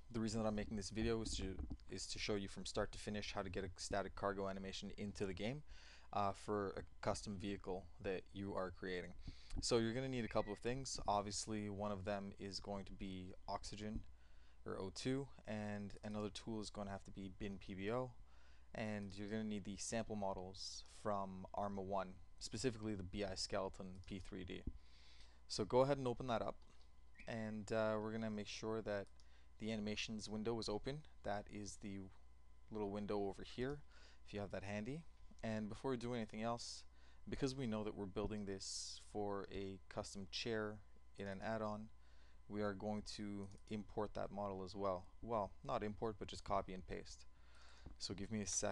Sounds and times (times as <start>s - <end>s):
Speech: 0.1s - 24.8s, 25.5s - 26.6s, 27.2s - 47.3s, 48.0s - 48.7s.